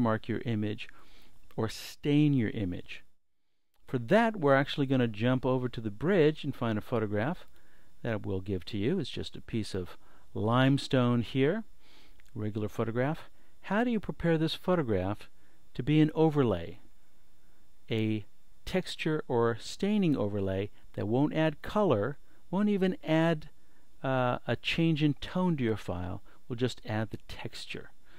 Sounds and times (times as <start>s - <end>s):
Speech: 0.0s - 3.1s, 3.8s - 11.7s, 12.3s - 16.8s, 17.9s - 28.0s.